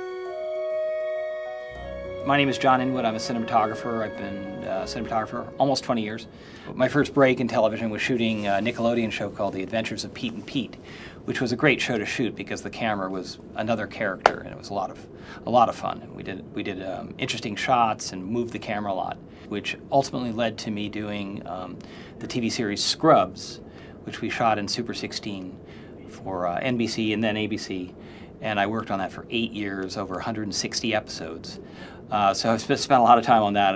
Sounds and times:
Speech: 2.2 - 33.7.

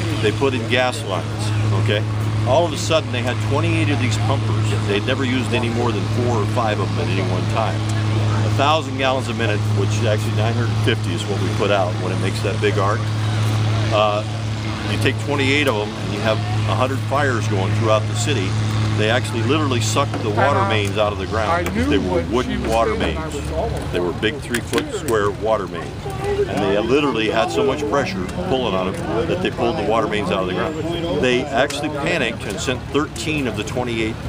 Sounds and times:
Speech: 0.0 - 13.2, 13.9 - 34.2
Vehicle: 0.0 - 34.2.

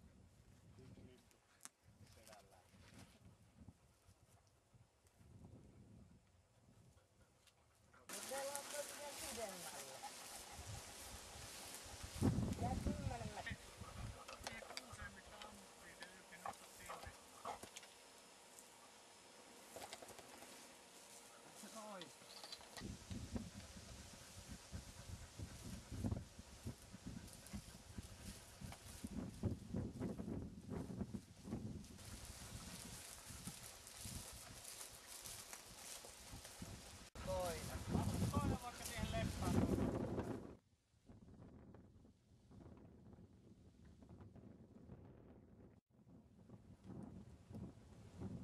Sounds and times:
Speech: 2.1 - 2.7, 8.1 - 10.1, 12.6 - 13.6, 14.4 - 17.2, 21.6 - 22.1, 37.2 - 39.7.

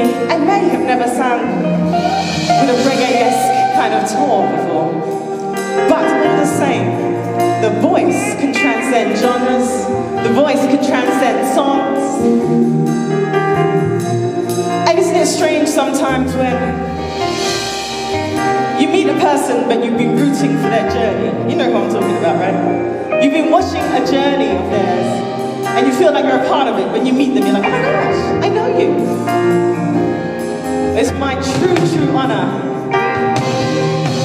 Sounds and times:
Speech: 0.0 - 1.6, 2.6 - 5.0, 5.8 - 7.0, 7.6 - 12.2, 14.8 - 16.8, 18.8 - 25.2, 25.8 - 29.2, 31.0 - 32.7
Music: 0.0 - 34.2.

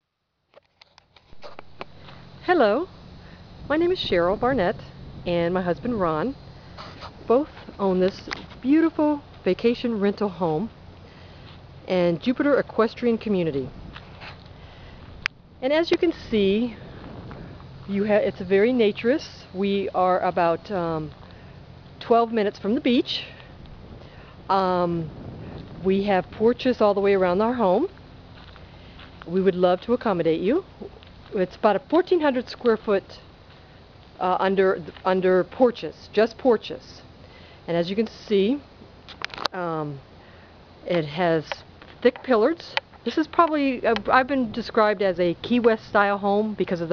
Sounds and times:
Speech: 2.4 - 2.9, 3.7 - 6.4, 7.3 - 10.7, 11.9 - 13.7, 15.6 - 16.8, 17.9 - 21.1, 22.0 - 23.4, 24.5 - 25.1, 25.8 - 27.9, 29.3 - 33.2, 34.2 - 37.1, 37.7 - 38.7, 39.5 - 40.0, 40.8 - 46.9.

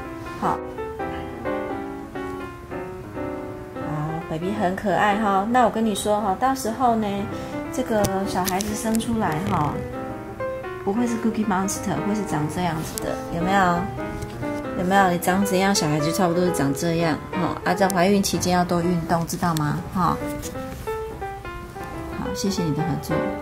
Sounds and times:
Music: 0.0 - 23.4
Speech: 3.8 - 9.8, 10.9 - 13.9, 14.8 - 20.2, 22.2 - 23.4.

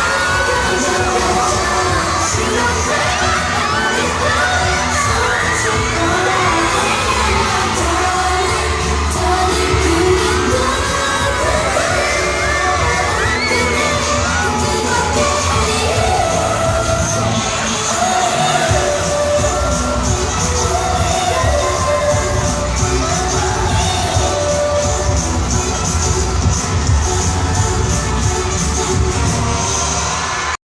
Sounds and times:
Pop music: 0.0 - 30.6.

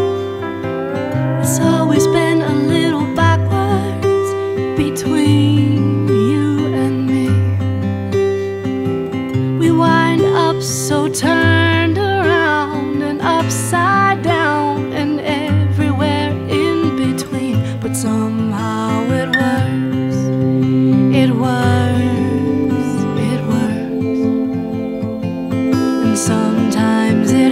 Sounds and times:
Music: 0.0 - 27.5.

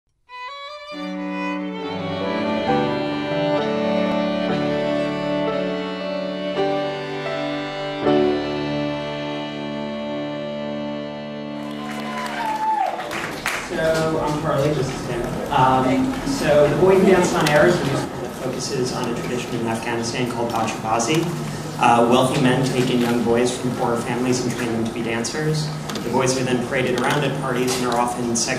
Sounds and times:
Violin, fiddle: 0.3 - 11.8.

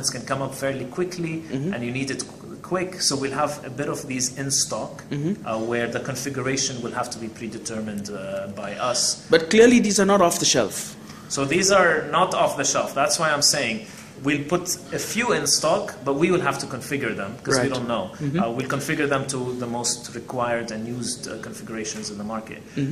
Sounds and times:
Speech: 0.0 - 22.9.

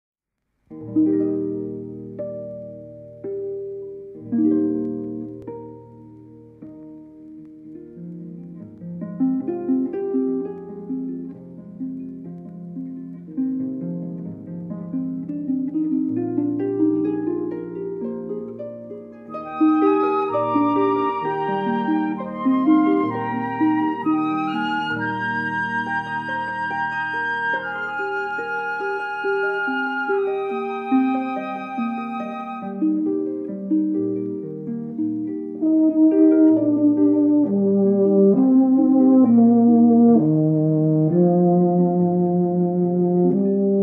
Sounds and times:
Harp: 0.7 - 43.8
Piano: 0.7 - 43.8.

